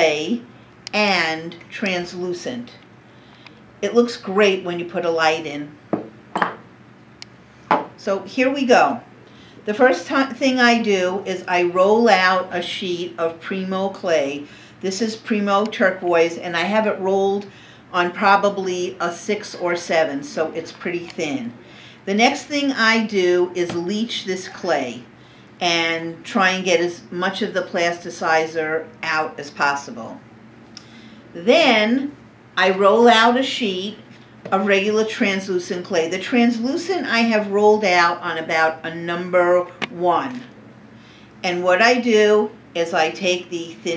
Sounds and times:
Speech: 0.0s - 2.8s, 3.8s - 5.8s, 8.0s - 9.1s, 9.7s - 30.2s, 31.4s - 40.5s, 41.4s - 43.9s.

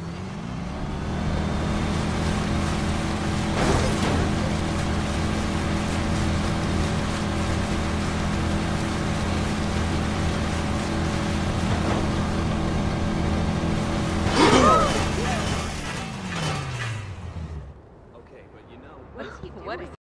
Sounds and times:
Motorboat, speedboat: 0.0s - 17.2s
Speech: 18.1s - 20.0s.

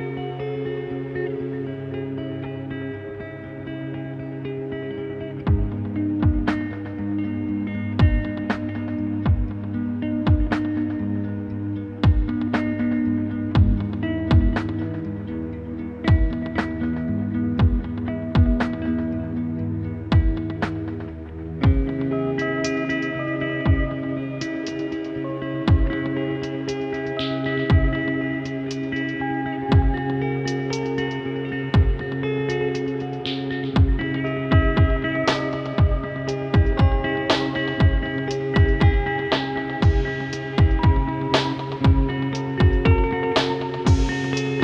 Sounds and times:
Music: 0.0s - 44.6s.

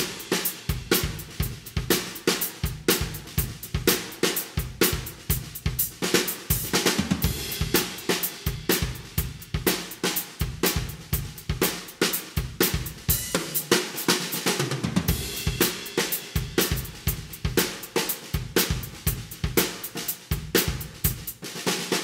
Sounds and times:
Bass drum: 0.0s - 13.6s, 14.8s - 21.4s
Drum kit: 0.0s - 22.0s
Drum roll: 0.0s - 22.0s.

